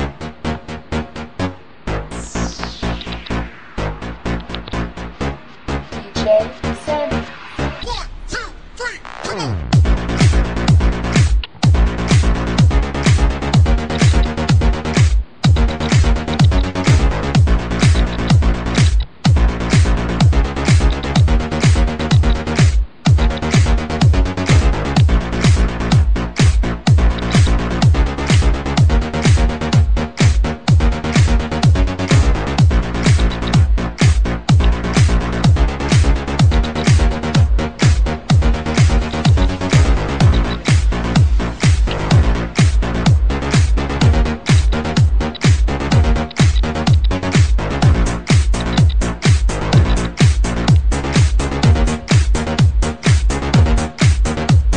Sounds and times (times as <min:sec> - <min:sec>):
Dubstep: 0:00.0 - 0:54.7
Techno: 0:00.0 - 0:54.7.